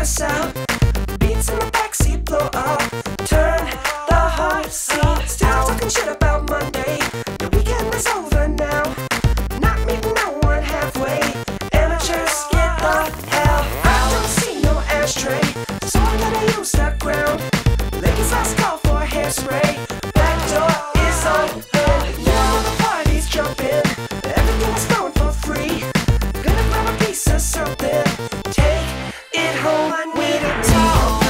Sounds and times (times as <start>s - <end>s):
Exciting music: 0.0s - 31.2s.